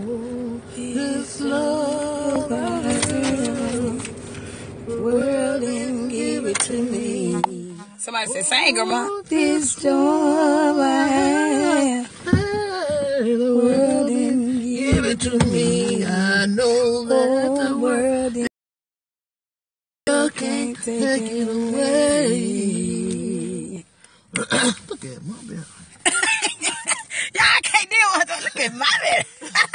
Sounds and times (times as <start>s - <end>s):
Female singing: 0.0s - 4.0s, 4.9s - 18.5s, 20.1s - 23.8s.